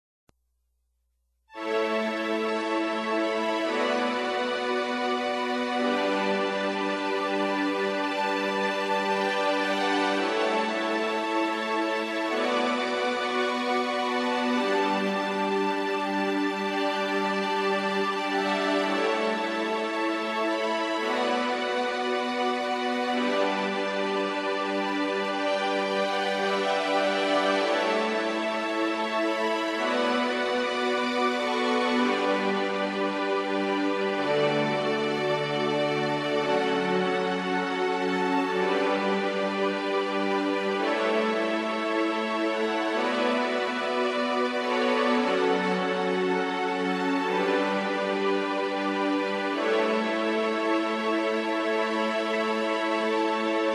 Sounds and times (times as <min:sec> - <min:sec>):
Background music: 0:01.5 - 0:53.7
New-age music: 0:01.5 - 0:53.7.